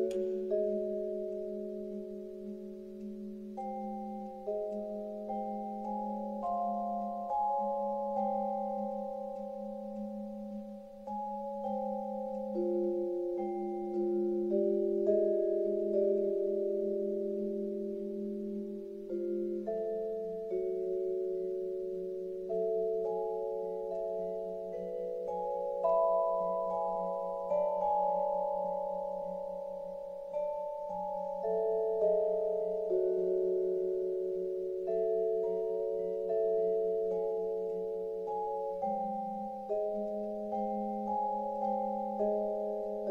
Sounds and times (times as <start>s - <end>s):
Vibraphone: 0.0s - 43.1s.